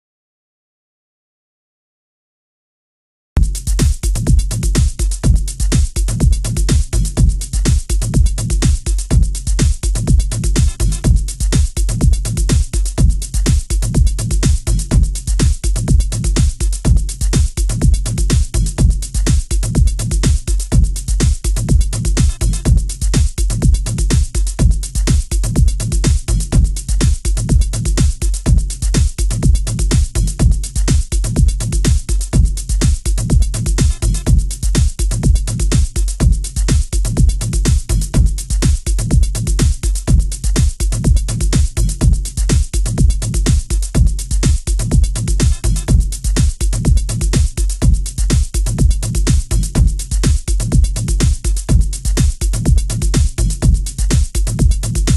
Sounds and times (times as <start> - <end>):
Music: 3.4 - 55.1.